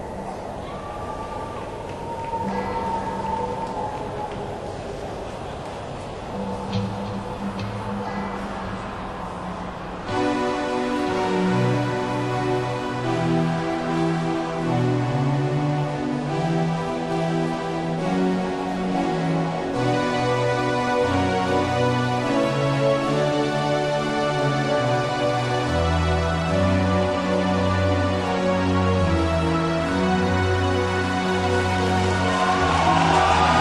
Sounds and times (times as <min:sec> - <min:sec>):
Theme music: 0:06.3 - 0:33.6.